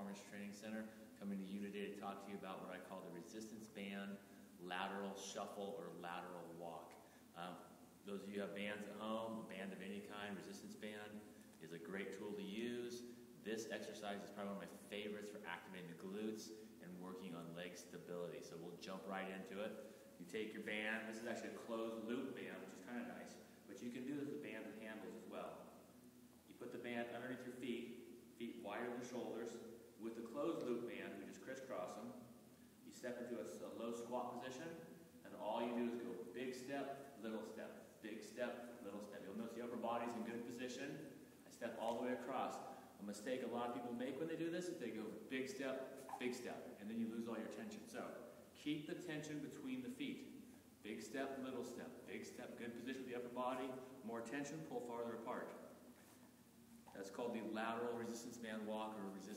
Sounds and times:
Speech: 0:00.0 - 0:25.9, 0:26.5 - 0:55.8, 0:56.8 - 0:59.3.

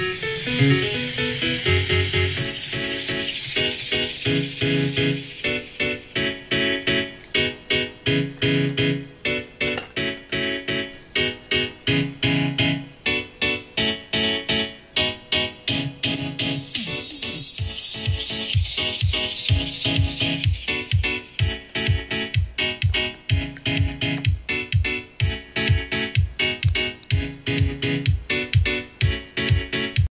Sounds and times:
Music: 0:00.0 - 0:30.1.

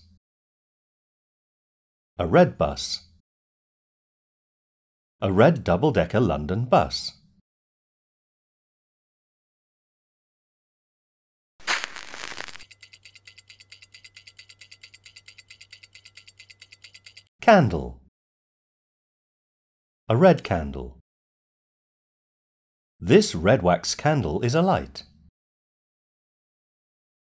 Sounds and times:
Speech: 0:02.2 - 0:03.1, 0:05.2 - 0:07.2, 0:17.4 - 0:18.1, 0:20.1 - 0:21.0, 0:23.0 - 0:25.1.

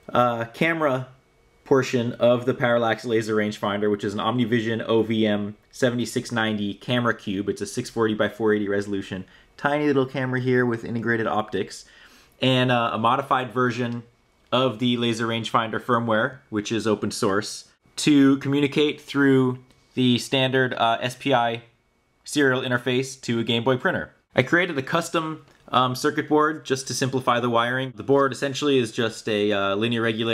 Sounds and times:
Speech: 0:00.0 - 0:30.3.

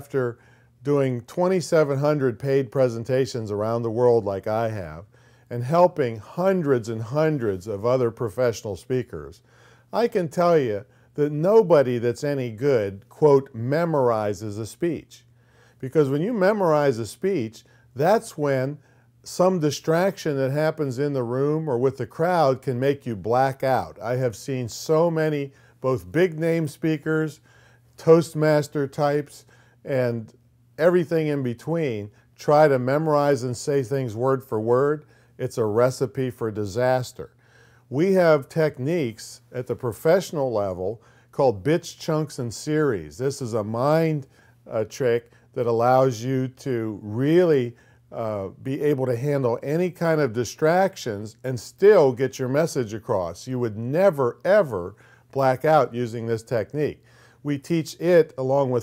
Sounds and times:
Male speech, man speaking: 0:00.0 - 0:09.4, 0:10.0 - 0:15.2, 0:15.8 - 0:27.4, 0:28.0 - 0:37.3, 0:37.9 - 0:58.8.

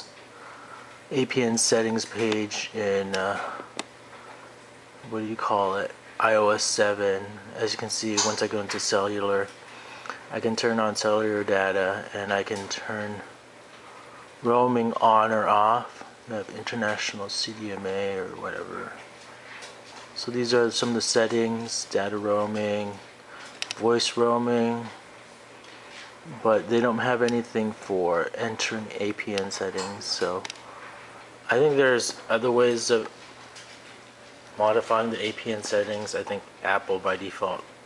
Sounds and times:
Speech: 0:01.1 - 0:03.7, 0:05.0 - 0:09.6, 0:10.3 - 0:13.4, 0:14.4 - 0:19.0, 0:20.2 - 0:23.1, 0:23.8 - 0:25.0, 0:26.2 - 0:30.5, 0:31.5 - 0:33.2, 0:34.6 - 0:37.7.

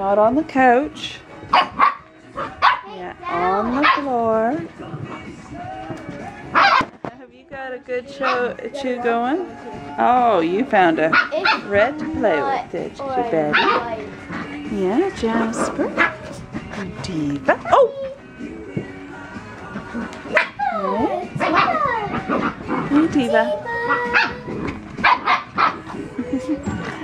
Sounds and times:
Music: 0:00.0 - 0:27.0.

